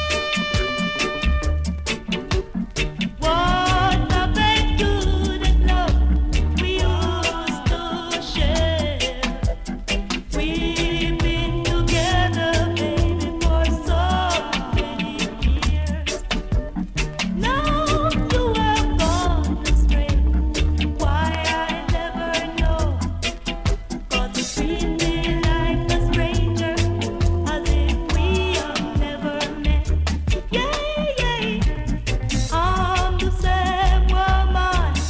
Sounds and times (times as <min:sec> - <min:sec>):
Blues: 0:00.0 - 0:35.1
Rhythm and blues: 0:00.0 - 0:35.1.